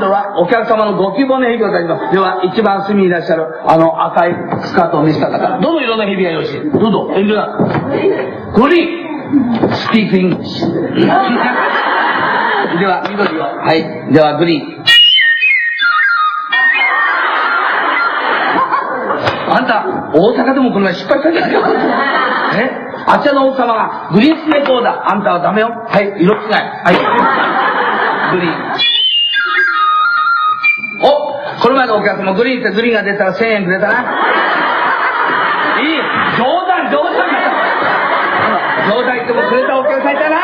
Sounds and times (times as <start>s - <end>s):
Music: 14.9s - 16.9s, 29.4s - 31.1s.